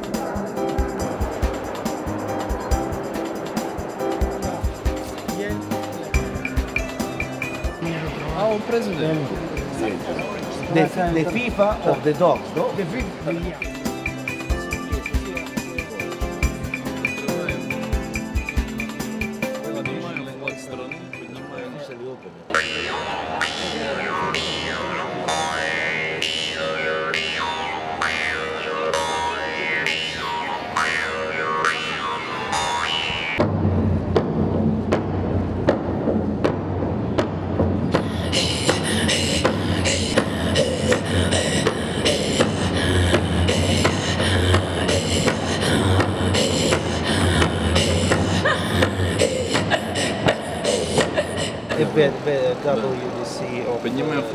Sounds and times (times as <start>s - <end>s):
Music: 0.0s - 52.0s.